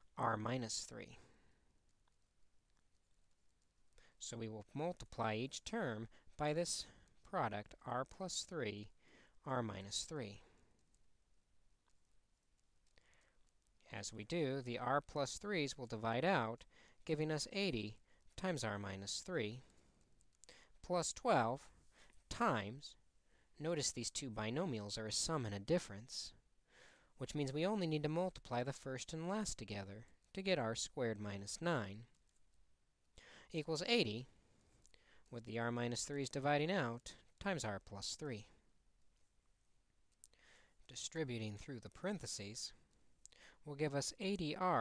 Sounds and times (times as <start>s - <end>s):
Speech: 0.1s - 1.3s, 4.2s - 10.5s, 13.8s - 19.7s, 20.8s - 21.7s, 22.3s - 23.0s, 23.6s - 26.4s, 27.2s - 32.1s, 33.5s - 34.4s, 35.3s - 38.6s, 40.9s - 42.8s, 43.6s - 44.8s.